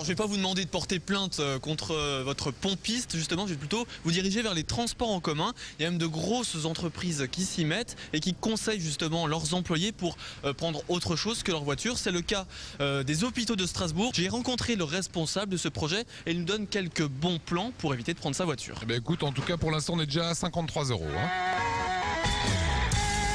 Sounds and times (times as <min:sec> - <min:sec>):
Speech: 0:00.0 - 0:21.3.